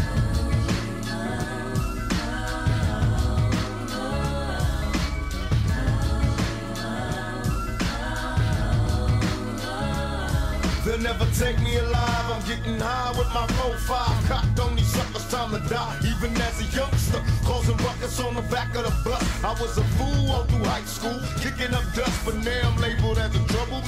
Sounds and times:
Soul music: 0.0s - 23.8s.

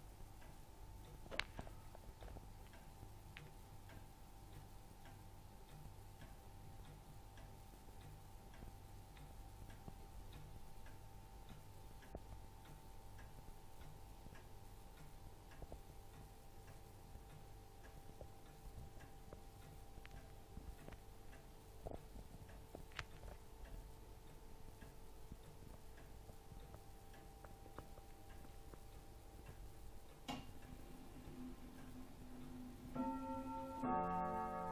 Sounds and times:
Tick-tock: 0.2s - 34.6s
Tick: 2.2s - 30.7s.

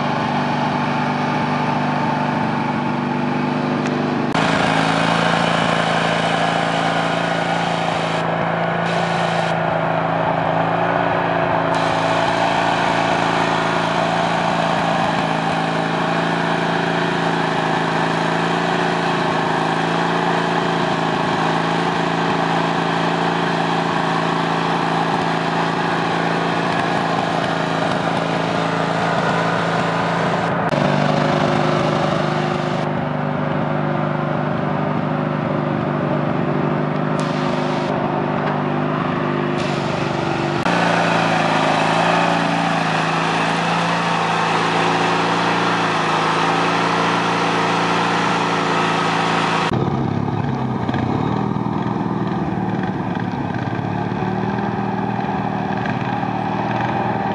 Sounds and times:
Outside, rural or natural: 0.0s - 57.3s
Vehicle: 0.0s - 57.3s.

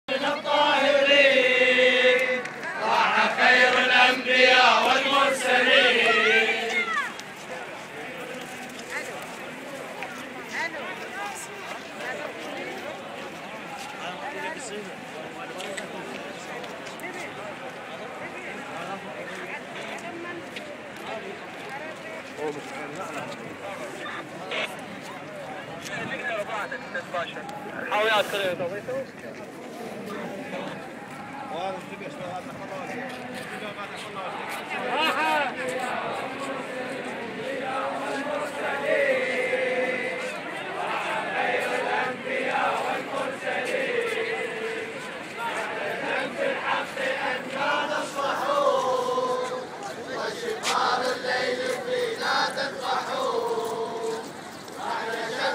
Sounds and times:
Speech: 4.6s - 55.5s.

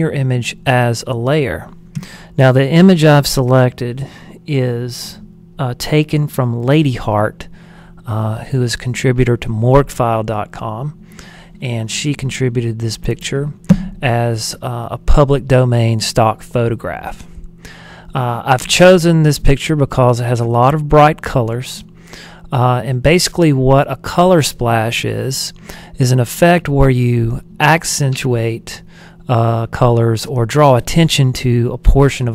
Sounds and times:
Speech: 0.0s - 1.8s, 2.4s - 11.0s, 11.6s - 17.3s, 18.1s - 21.9s, 22.5s - 32.3s.

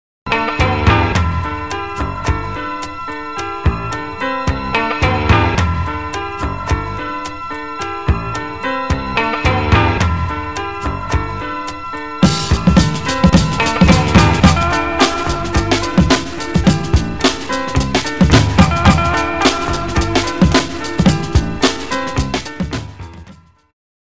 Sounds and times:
Music: 0.3s - 23.8s.

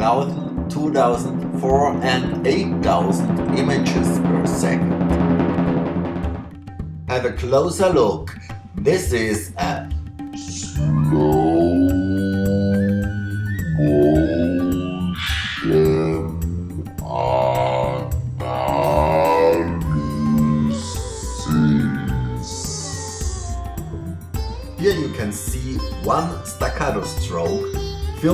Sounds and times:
Tabla: 9.8s - 28.3s.

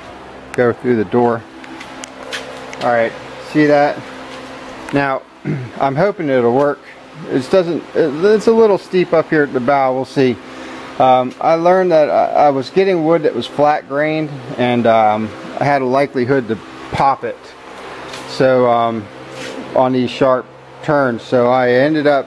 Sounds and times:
Speech: 0.5s - 1.5s, 2.8s - 4.1s, 4.9s - 10.4s, 11.0s - 17.6s, 18.3s - 19.1s, 19.7s - 22.2s.

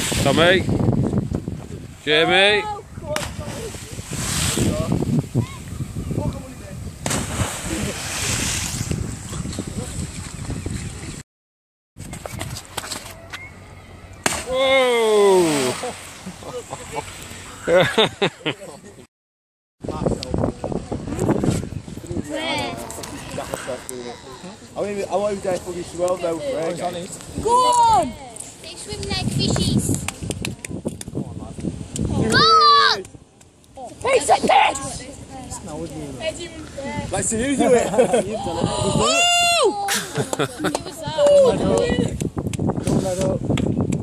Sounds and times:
Outside, rural or natural: 0.0s - 11.2s, 12.0s - 19.1s, 19.8s - 44.0s.

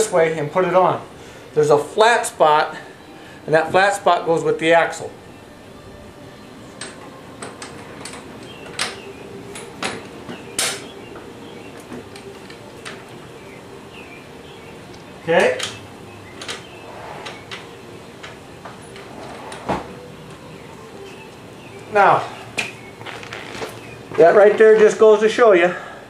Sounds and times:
Speech: 3.5s - 5.1s, 24.2s - 25.9s.

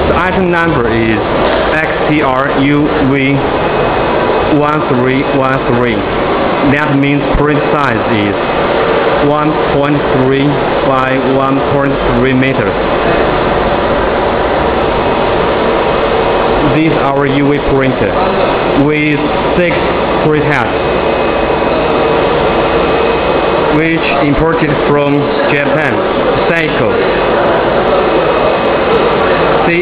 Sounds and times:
Printer: 0.0s - 29.8s
Speech: 0.1s - 3.5s, 4.5s - 8.4s, 9.2s - 12.8s, 16.6s - 20.8s, 23.7s - 27.3s, 29.6s - 29.8s.

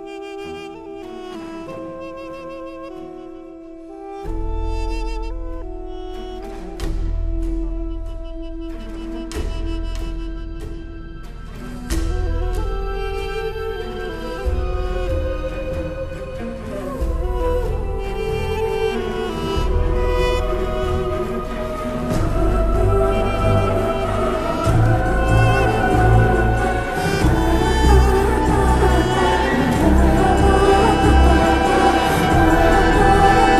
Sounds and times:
Music: 0.0s - 33.6s.

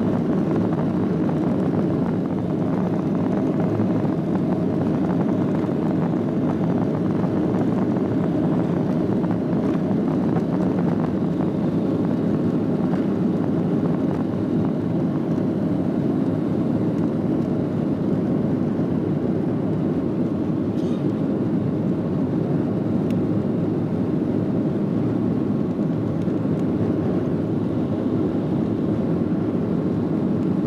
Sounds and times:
Fixed-wing aircraft, airplane: 0.0s - 30.6s.

